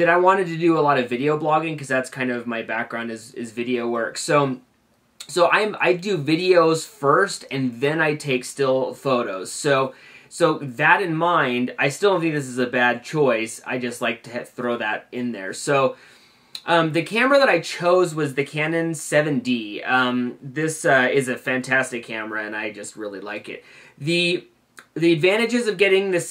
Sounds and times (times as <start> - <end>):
Speech: 0.0 - 16.0, 16.6 - 26.3.